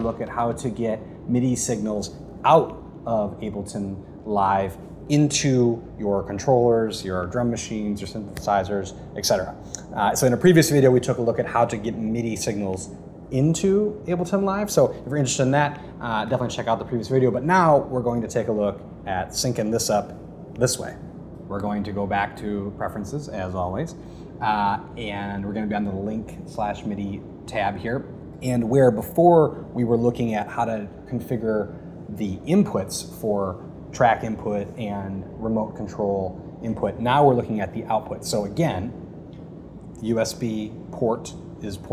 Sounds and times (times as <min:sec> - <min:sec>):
Speech: 0:00.0 - 0:39.0, 0:40.0 - 0:41.9.